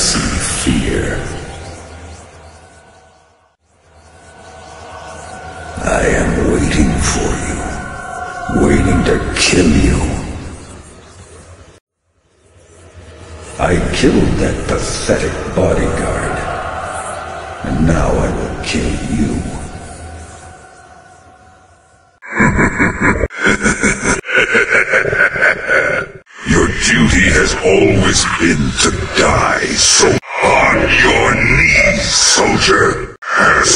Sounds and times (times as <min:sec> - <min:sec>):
Speech: 0:00.0 - 0:01.5, 0:05.8 - 0:10.5, 0:13.6 - 0:16.8, 0:17.6 - 0:19.8, 0:26.4 - 0:33.7.